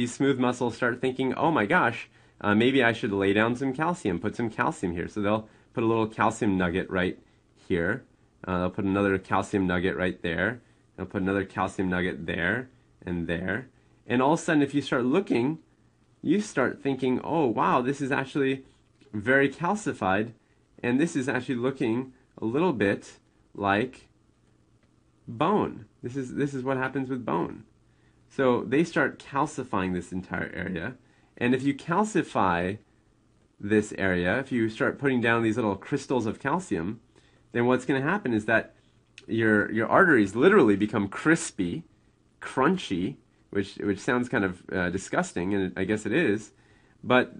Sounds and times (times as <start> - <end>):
Narration, monologue: 0.0 - 47.3.